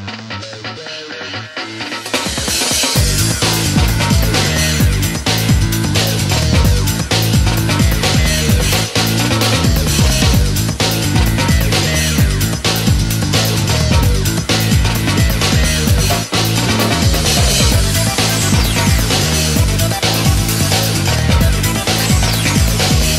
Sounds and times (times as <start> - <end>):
Video game music: 0.0 - 23.1.